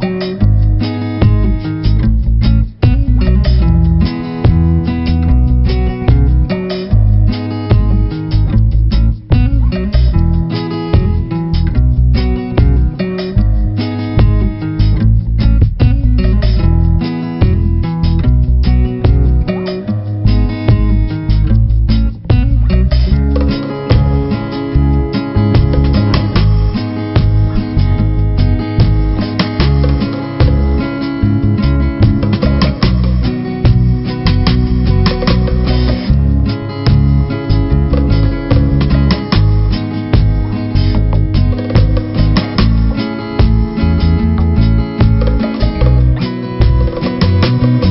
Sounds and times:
Music: 0.0s - 47.9s.

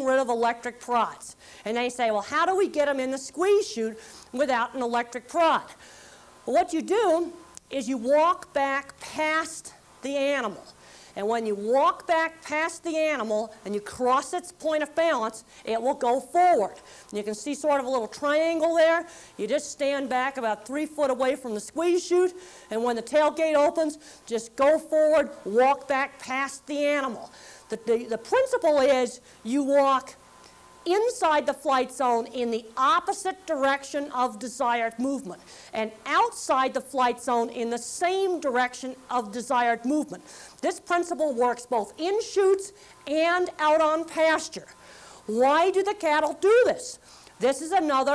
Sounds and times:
Speech: 0.0s - 5.7s, 6.5s - 30.2s, 30.9s - 44.7s, 45.3s - 48.1s.

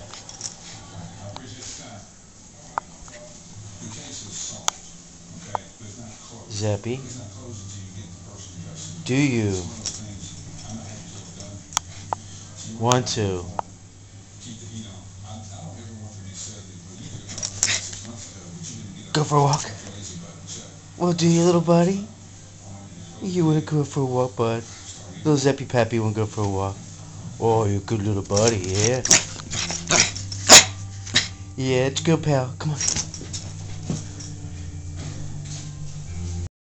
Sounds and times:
Speech: 1.0s - 11.7s, 12.4s - 13.7s, 14.4s - 29.2s, 31.6s - 33.0s
Yip: 29.9s - 31.2s.

